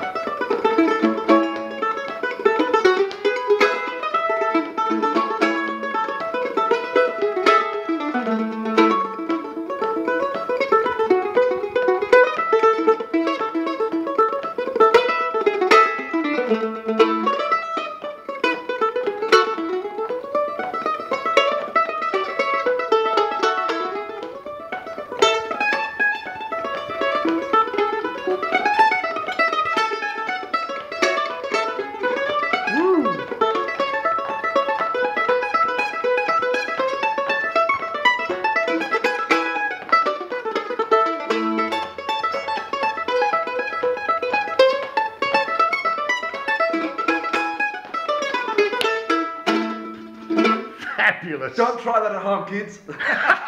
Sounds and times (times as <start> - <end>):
Mandolin: 0.0 - 53.4.